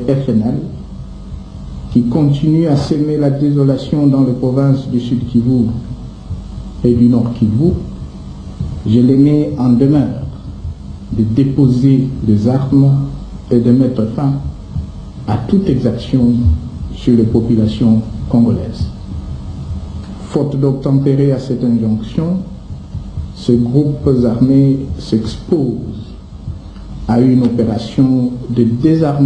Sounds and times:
Speech: 0.0 - 0.8, 1.9 - 6.0, 6.8 - 8.0, 8.8 - 10.5, 11.1 - 14.6, 15.2 - 19.0, 20.2 - 22.6, 23.4 - 26.2, 27.1 - 29.2.

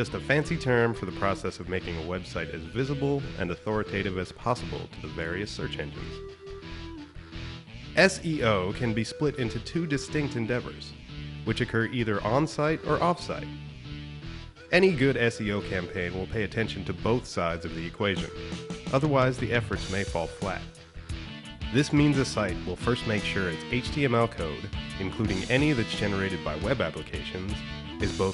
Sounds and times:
Speech: 0.0 - 6.2, 8.0 - 13.5, 14.7 - 20.7, 21.7 - 28.3
Music: 0.0 - 28.3.

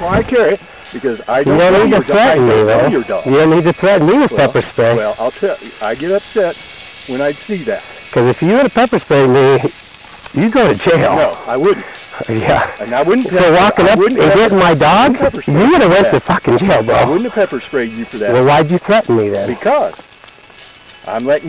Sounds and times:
Speech: 0.0 - 9.7, 10.4 - 20.0, 21.1 - 21.4.

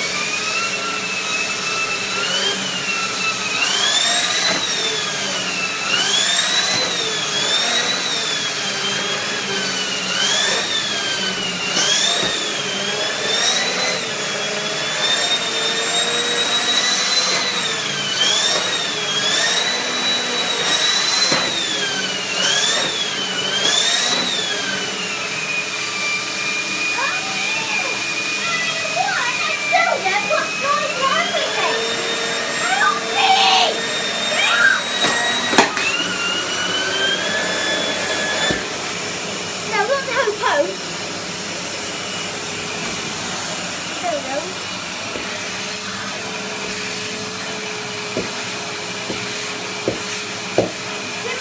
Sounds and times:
Vacuum cleaner: 0.0 - 51.4
Speech: 27.0 - 31.9, 32.6 - 34.7, 39.7 - 40.8, 44.0 - 44.6, 51.2 - 51.4.

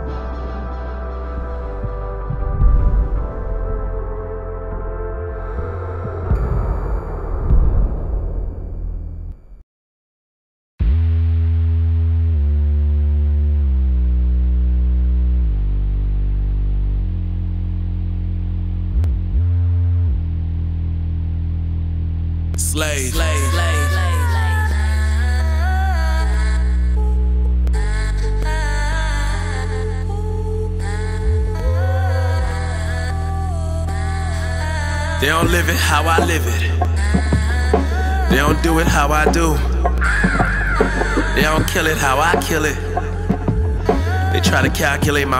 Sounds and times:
Theme music: 0.0 - 9.3, 22.6 - 24.8, 35.2 - 45.3.

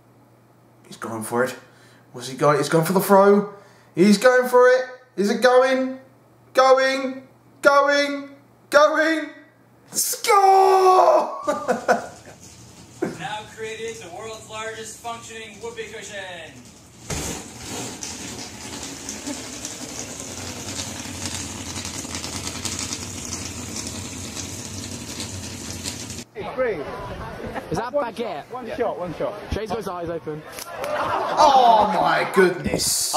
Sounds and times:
Inside, small room: 0.0 - 28.2
Speech: 0.9 - 11.1, 13.0 - 16.6, 31.4 - 33.1
Laughter: 11.4 - 12.4, 26.8 - 28.0, 30.4 - 32.0.

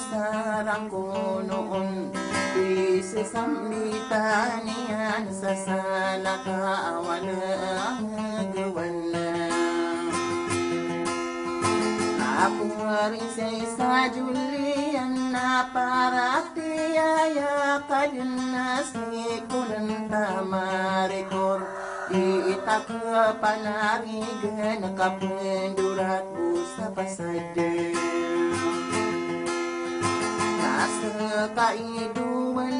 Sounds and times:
Singing: 0.0 - 10.2, 12.1 - 29.0, 30.4 - 32.7
Inside, small room: 0.0 - 32.7
Music: 0.0 - 32.7.

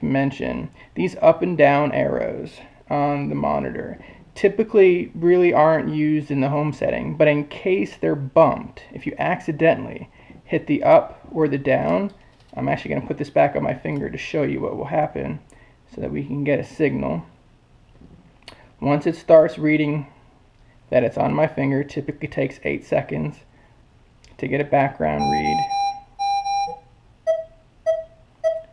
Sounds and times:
Speech: 0.0 - 17.4, 18.8 - 20.2, 20.9 - 23.5, 24.3 - 25.6
Inside, small room: 0.0 - 28.7
Buzzer: 25.2 - 28.7.

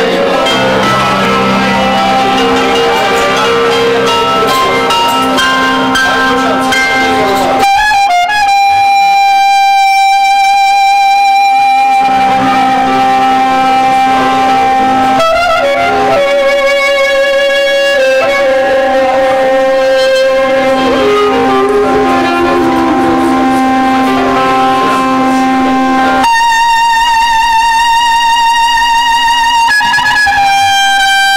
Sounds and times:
Clarinet: 0.0 - 31.3.

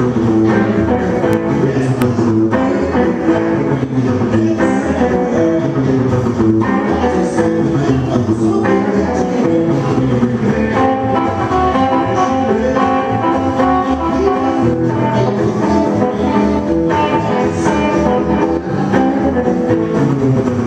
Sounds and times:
Strum: 0.0 - 20.6.

